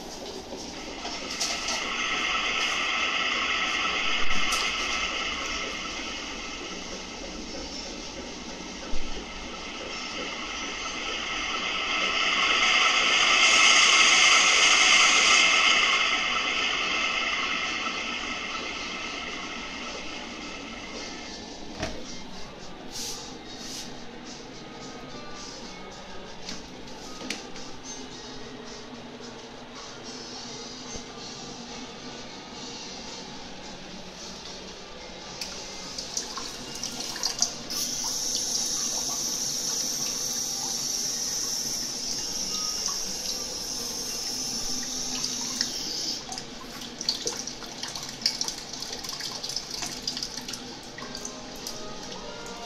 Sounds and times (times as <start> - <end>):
Water: 35.4 - 52.6.